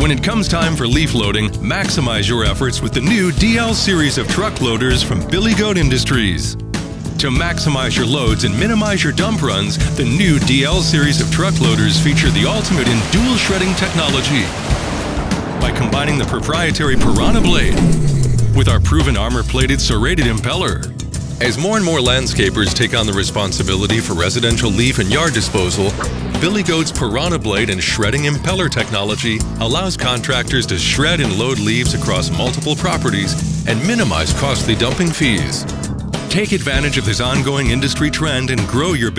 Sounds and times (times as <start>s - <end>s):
Speech: 0.0s - 6.6s, 7.2s - 14.5s, 15.6s - 17.9s, 18.5s - 35.7s, 36.3s - 39.1s
Music: 0.0s - 39.1s.